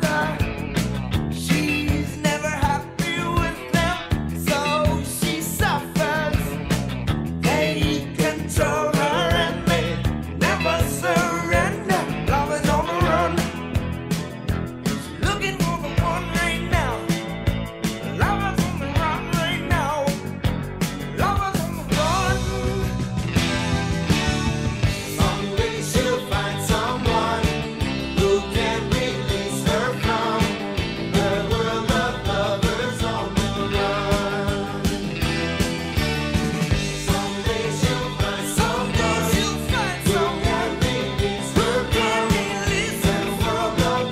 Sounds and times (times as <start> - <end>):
Music: 0.0 - 44.1.